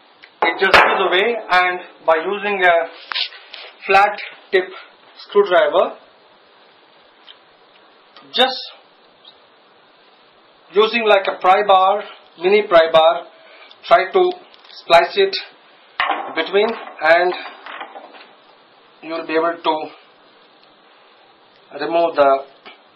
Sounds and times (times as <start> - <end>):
Speech: 0.4 - 3.0, 3.8 - 6.0, 8.2 - 8.8, 10.7 - 15.6, 16.4 - 17.4, 19.0 - 20.0, 21.7 - 22.6.